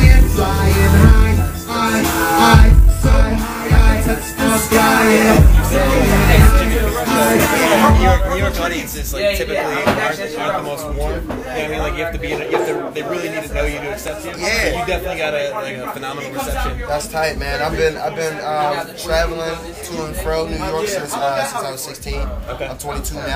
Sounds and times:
Music: 0.0s - 10.2s
Speech: 6.0s - 23.3s.

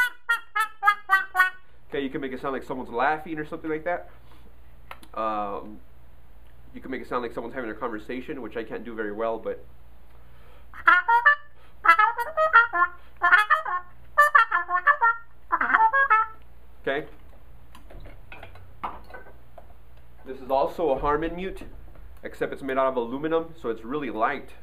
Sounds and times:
Trumpet: 0.0s - 1.9s, 10.7s - 16.4s.

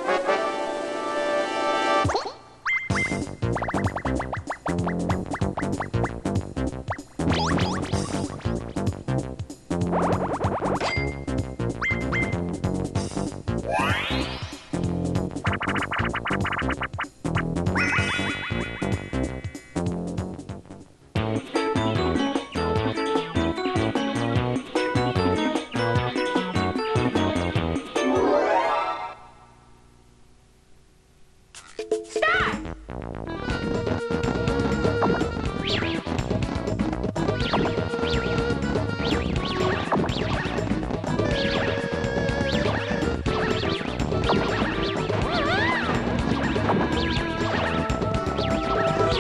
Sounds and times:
Music: 0.0s - 29.7s, 31.6s - 49.2s.

